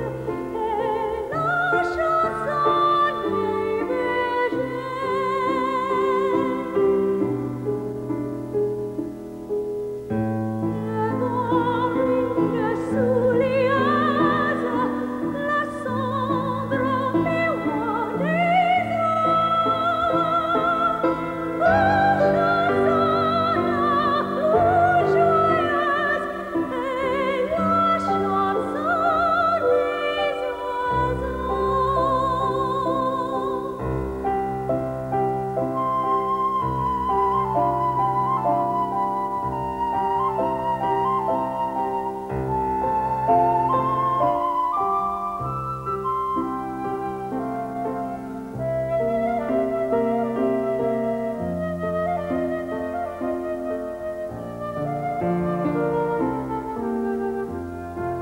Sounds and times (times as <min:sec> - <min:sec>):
Opera: 0:00.0 - 0:58.2.